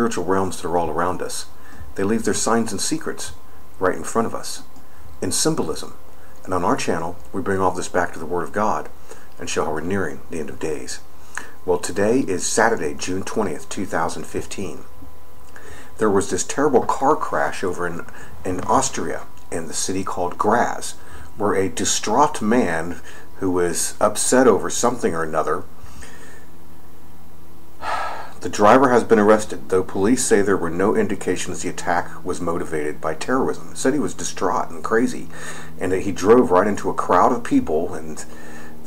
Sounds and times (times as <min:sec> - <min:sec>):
Speech: 0:00.0 - 0:14.9, 0:16.0 - 0:25.7, 0:28.4 - 0:38.8.